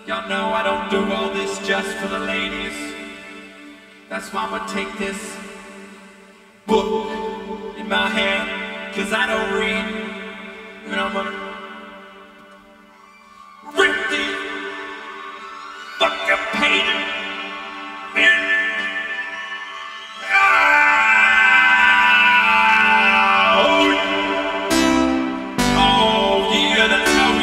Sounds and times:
Speech: 4.1s - 5.4s.

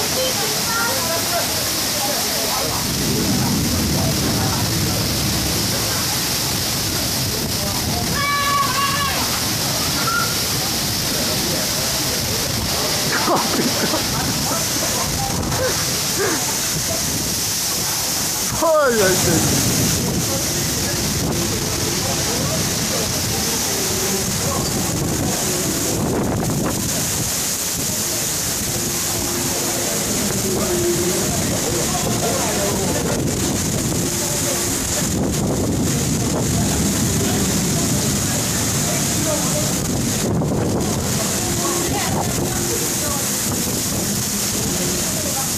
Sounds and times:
Speech: 0.0s - 26.0s, 29.4s - 45.5s
Outside, urban or manmade: 0.0s - 45.5s
Rain: 0.0s - 45.5s.

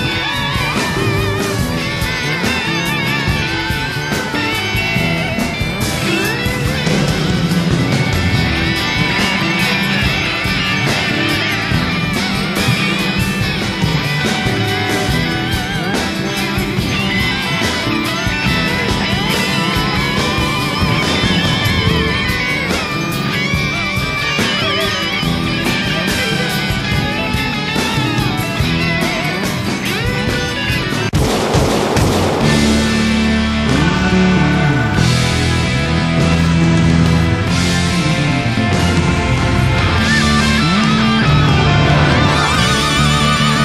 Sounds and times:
Music: 0.0s - 43.6s.

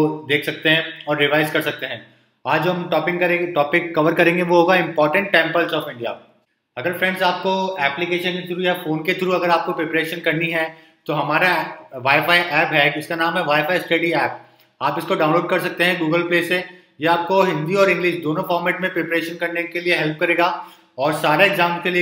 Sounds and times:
Speech: 0.0s - 6.2s, 6.8s - 22.0s.

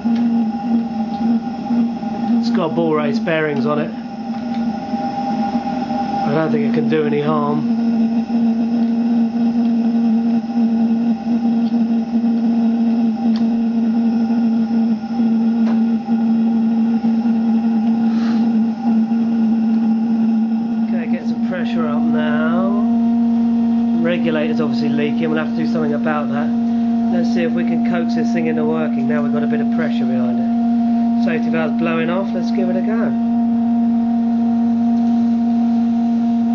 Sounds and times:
Engine: 0.0s - 36.5s.

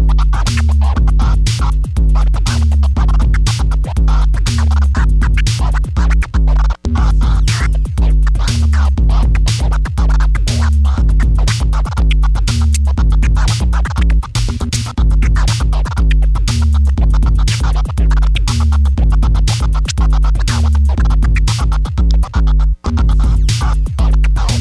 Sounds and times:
Music: 0.0s - 24.6s
Scratch: 0.1s - 24.6s.

